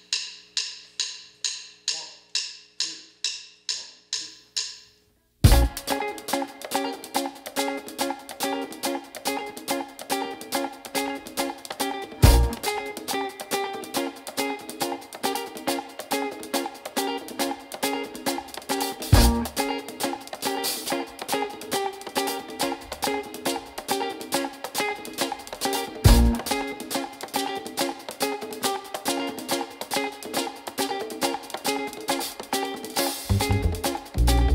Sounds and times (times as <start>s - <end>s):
Music: 0.0s - 34.5s.